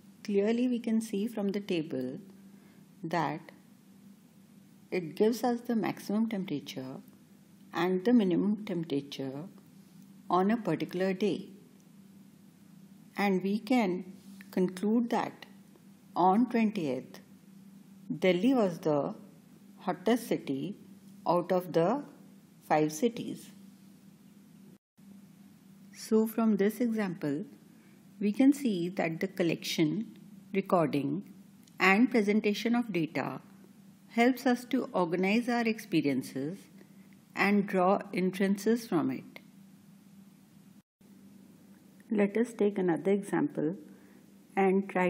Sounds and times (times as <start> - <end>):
Speech: 0.2 - 2.3, 3.0 - 3.6, 5.0 - 7.1, 7.8 - 9.6, 10.3 - 11.6, 13.2 - 15.6, 16.2 - 17.3, 18.1 - 23.6, 26.0 - 27.6, 28.2 - 33.5, 34.1 - 36.7, 37.4 - 39.5, 42.1 - 43.9, 44.6 - 45.0.